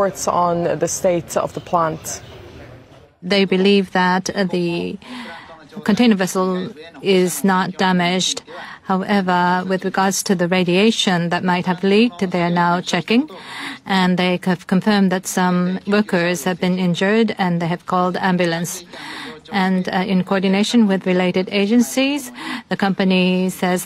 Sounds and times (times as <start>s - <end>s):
Speech: 0.0s - 2.2s, 3.2s - 23.8s.